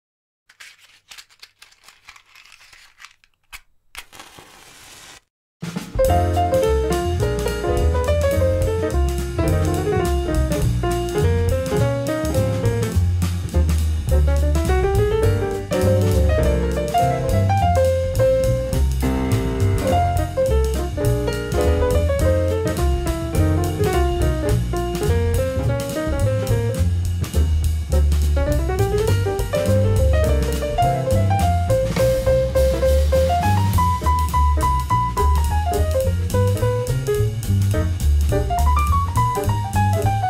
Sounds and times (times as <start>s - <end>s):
Music: 5.6s - 40.2s.